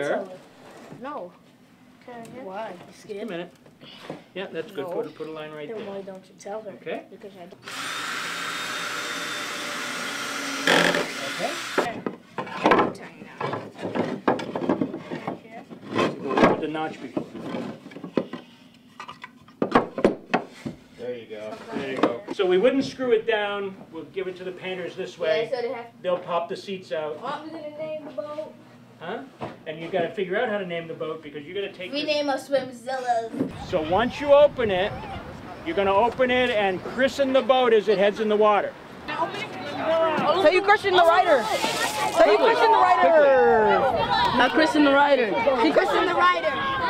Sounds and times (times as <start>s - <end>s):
Electric toothbrush: 7.6s - 12.0s
Wood: 10.6s - 16.6s.